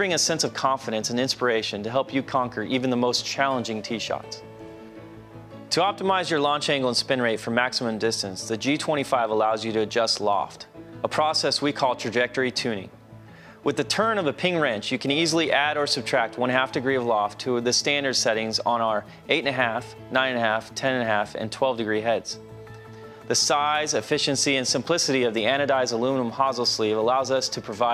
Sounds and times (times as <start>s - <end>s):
Speech: 0.0s - 4.4s, 5.7s - 12.9s, 13.6s - 22.4s, 23.3s - 27.9s
Music: 0.0s - 27.9s.